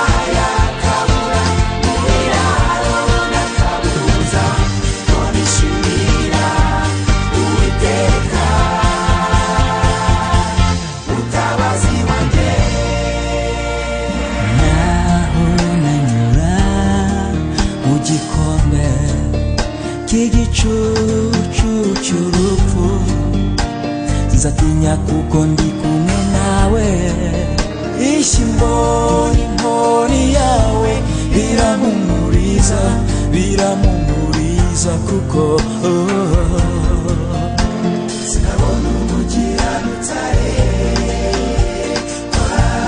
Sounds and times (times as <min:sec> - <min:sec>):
Choir: 0:00.0 - 0:17.2, 0:28.0 - 0:33.0, 0:38.1 - 0:42.8
Christian music: 0:00.0 - 0:42.8.